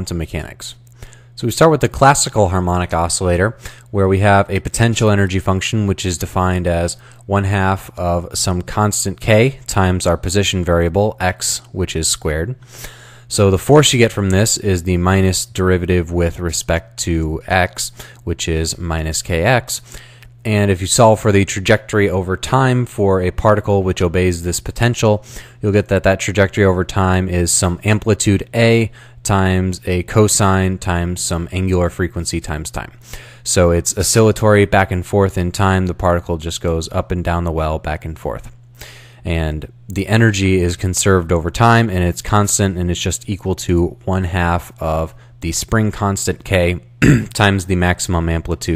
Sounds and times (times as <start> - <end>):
Speech: 0.0 - 0.8, 1.4 - 12.6, 13.3 - 19.8, 20.4 - 38.6, 39.2 - 48.7.